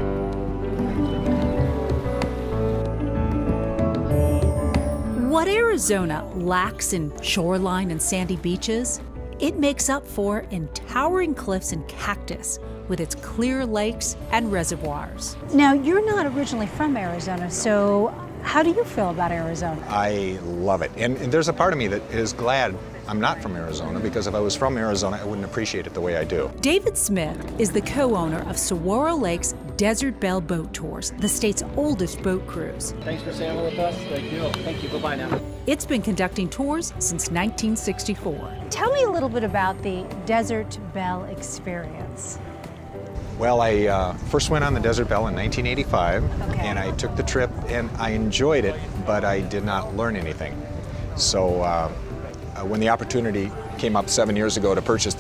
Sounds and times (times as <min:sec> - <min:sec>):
Music: 0:00.0 - 0:55.2.